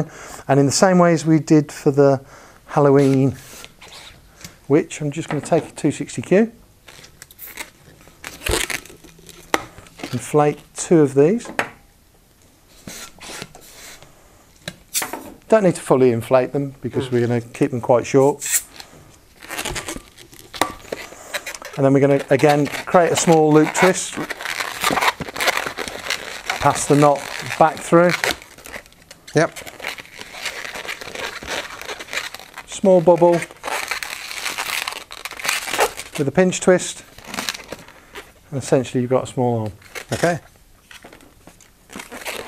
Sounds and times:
Speech: 0.0s - 3.4s, 4.7s - 6.6s, 10.1s - 11.5s, 15.5s - 18.5s, 21.8s - 24.3s, 26.6s - 28.3s, 29.3s - 29.6s, 32.7s - 33.5s, 36.2s - 37.1s, 38.5s - 40.5s
Inside, small room: 0.0s - 42.4s
Crumpling, crinkling: 6.8s - 10.6s, 18.7s - 38.4s, 39.7s - 42.4s.

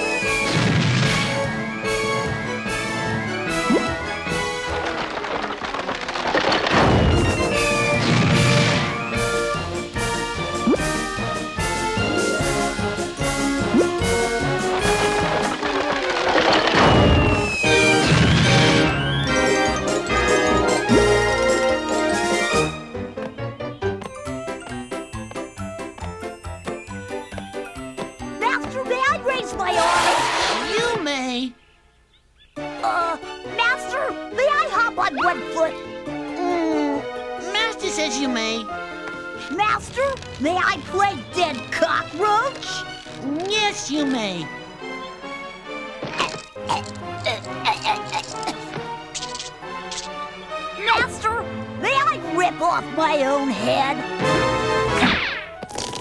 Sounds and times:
Music: 0.0s - 31.0s, 32.6s - 56.0s
Speech: 28.4s - 29.9s, 30.7s - 31.6s, 32.8s - 35.8s, 36.4s - 38.7s, 39.5s - 44.5s, 50.8s - 54.0s.

